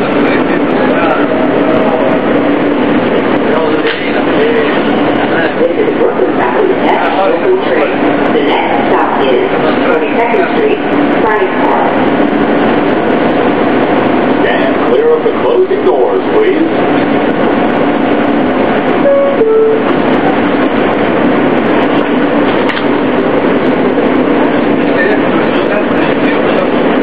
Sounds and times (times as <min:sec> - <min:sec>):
Inside, public space: 0:00.0 - 0:27.0
Speech: 0:03.4 - 0:12.1, 0:14.4 - 0:16.8.